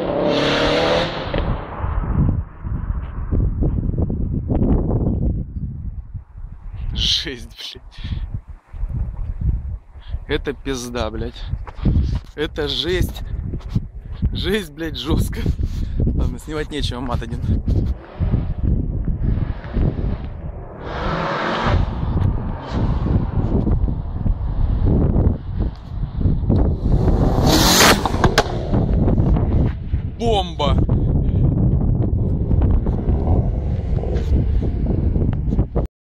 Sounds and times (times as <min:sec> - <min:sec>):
Speech: 0:06.9 - 0:08.1, 0:10.3 - 0:11.5, 0:12.4 - 0:13.2, 0:14.4 - 0:15.6, 0:16.2 - 0:17.6, 0:30.2 - 0:30.9.